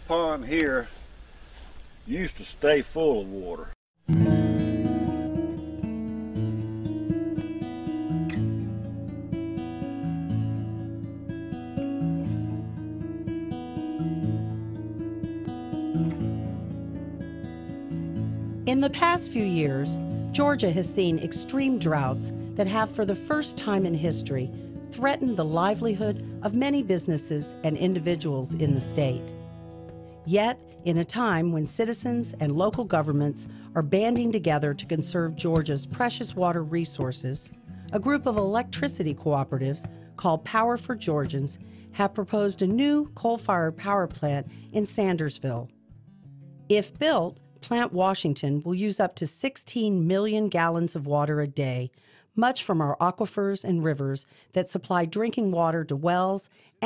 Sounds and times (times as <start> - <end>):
Speech: 0.1 - 0.9, 2.1 - 3.8, 18.7 - 29.3, 30.3 - 45.7, 46.7 - 56.8
Music: 4.0 - 51.2.